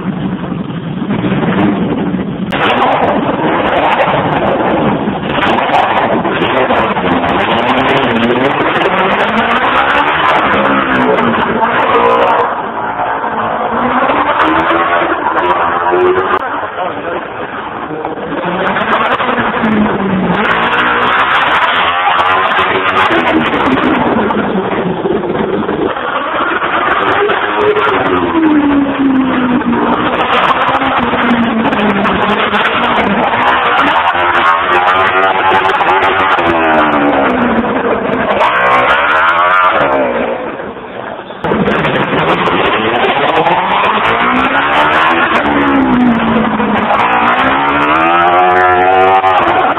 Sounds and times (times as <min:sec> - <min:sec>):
Car: 0:00.0 - 0:49.7
Accelerating, revving, vroom: 0:02.5 - 0:12.6, 0:13.6 - 0:16.4, 0:18.3 - 0:24.2, 0:25.9 - 0:40.4, 0:41.6 - 0:49.7.